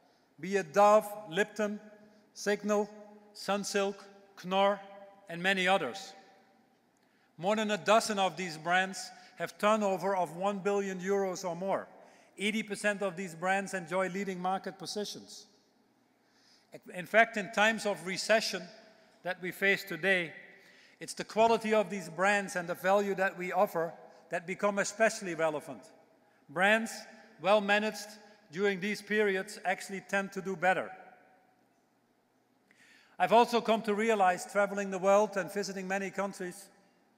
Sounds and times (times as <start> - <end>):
Male speech, man speaking: 0.4 - 6.2, 7.4 - 15.5, 16.8 - 20.4, 21.0 - 25.9, 26.5 - 30.9, 33.2 - 36.7.